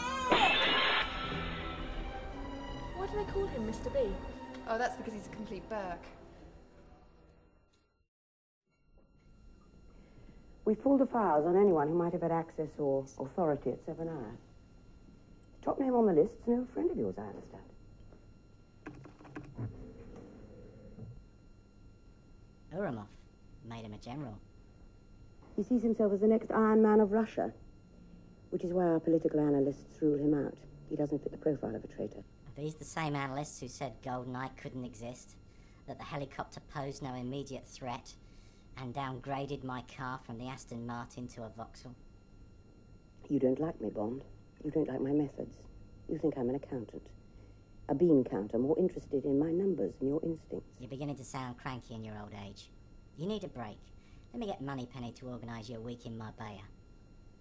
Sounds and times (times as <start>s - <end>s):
Conversation: 1.6s - 7.4s, 10.5s - 57.4s.